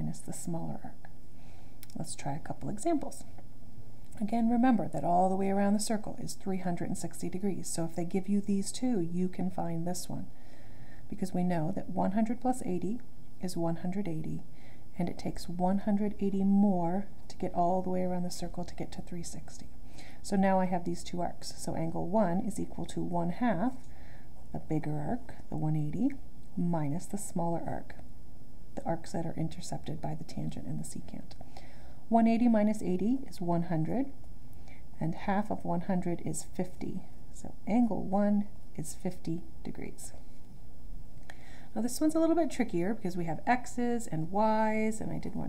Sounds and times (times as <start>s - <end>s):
Speech: 0.0s - 1.1s, 1.9s - 3.3s, 4.2s - 10.3s, 11.1s - 14.4s, 15.0s - 23.8s, 24.5s - 28.0s, 28.8s - 31.4s, 32.1s - 34.2s, 35.0s - 40.2s, 41.8s - 45.4s.